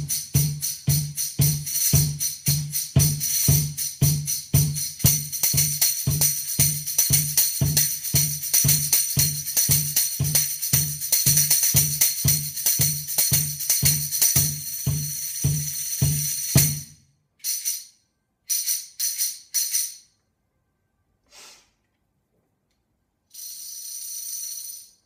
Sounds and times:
Tambourine: 0.0 - 20.1, 23.3 - 25.0.

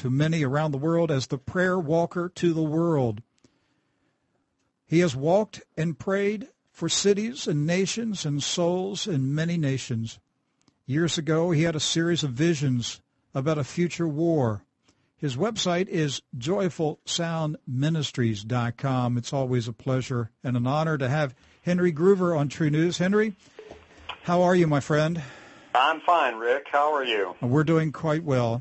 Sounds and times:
Speech: 0.0 - 3.2, 4.9 - 10.2, 10.9 - 28.6.

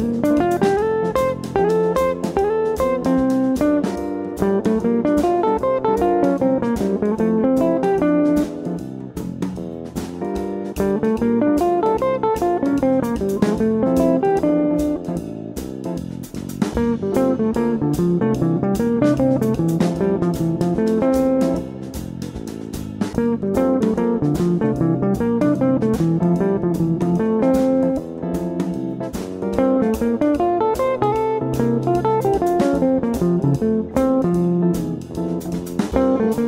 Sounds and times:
Guitar: 0.0 - 36.4.

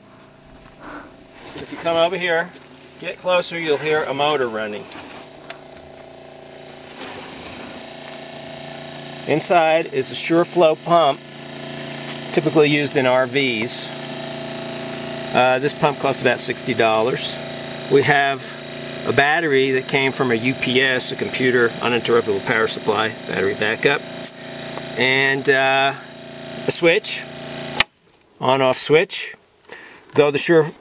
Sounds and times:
Speech: 1.6 - 4.9, 9.3 - 11.2, 12.3 - 13.9, 15.3 - 24.0, 25.0 - 27.3, 28.4 - 29.4, 30.1 - 30.8.

